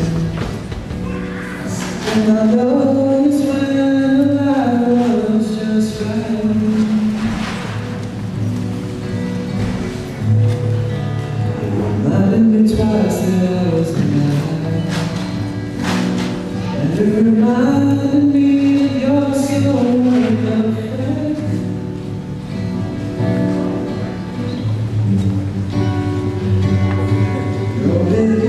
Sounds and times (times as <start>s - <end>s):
Music: 0.0s - 28.4s.